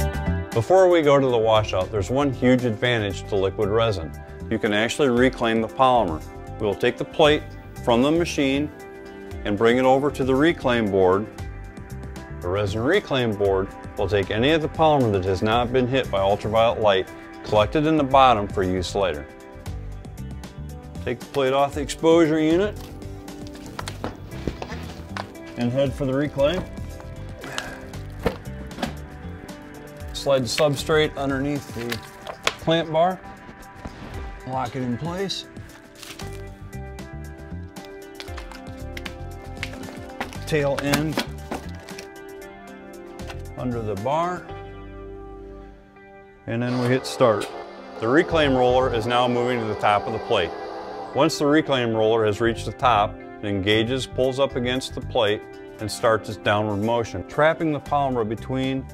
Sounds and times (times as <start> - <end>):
Music: 0.0 - 58.9
Speech: 0.6 - 8.7, 9.4 - 11.3, 12.4 - 19.2, 21.0 - 22.8, 25.6 - 26.7, 30.2 - 32.0, 32.6 - 33.2, 34.5 - 35.5, 40.5 - 41.2, 43.6 - 44.5, 46.5 - 50.6, 51.2 - 58.9.